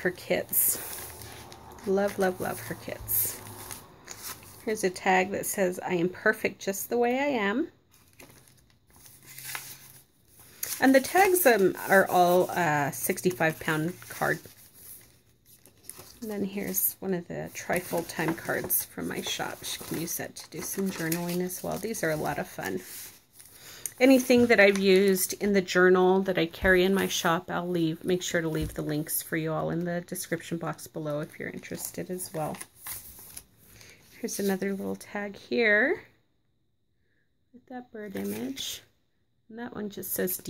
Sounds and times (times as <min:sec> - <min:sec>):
Speech: 0:00.0 - 0:00.8, 0:01.8 - 0:03.4, 0:04.7 - 0:07.7, 0:10.8 - 0:14.4, 0:16.2 - 0:22.9, 0:24.0 - 0:32.6, 0:34.2 - 0:36.1, 0:37.6 - 0:38.9, 0:39.5 - 0:40.4
Crumpling, crinkling: 0:00.7 - 0:04.7, 0:07.9 - 0:16.9, 0:17.5 - 0:25.4, 0:31.4 - 0:34.1.